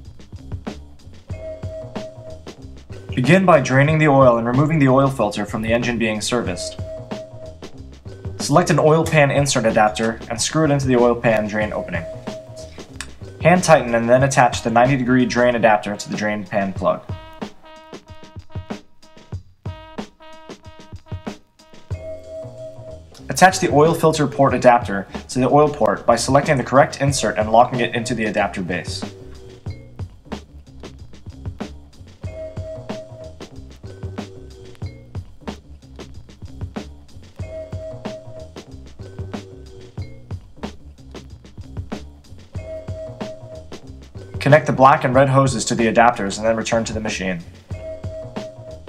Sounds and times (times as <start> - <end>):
Music: 0.0 - 48.8
Speech: 3.2 - 6.8, 8.4 - 12.6, 13.4 - 17.1, 23.3 - 29.1, 44.4 - 47.5.